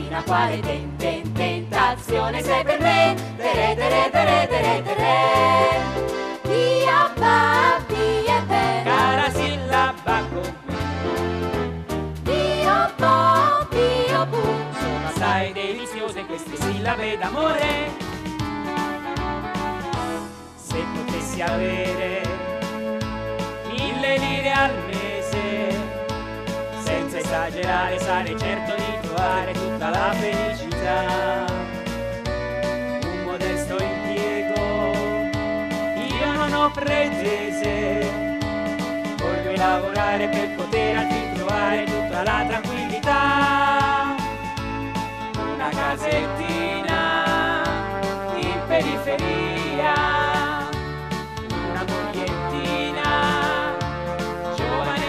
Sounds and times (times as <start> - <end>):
Music: 0.0 - 55.0.